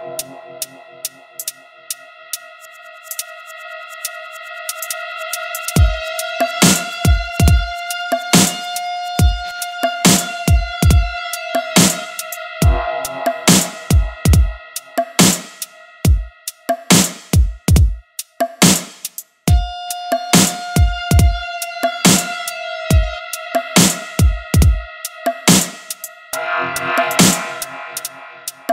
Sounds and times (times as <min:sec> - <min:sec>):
Synthesizer: 0:00.0 - 0:28.7.